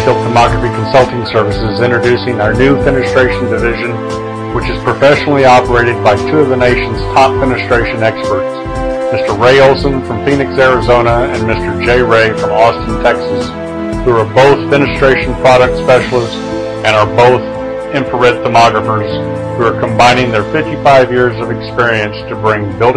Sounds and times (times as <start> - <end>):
Speech: 0.0 - 4.0, 4.6 - 13.5, 14.1 - 22.9
Music: 0.0 - 22.9.